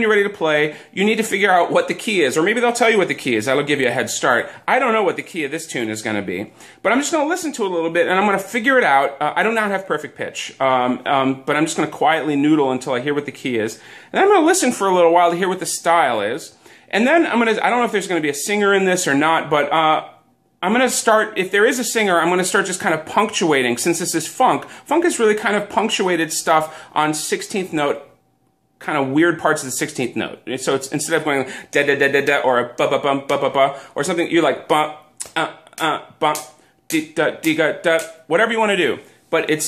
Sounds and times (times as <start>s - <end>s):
Speech: 0.0s - 28.2s, 28.8s - 39.6s.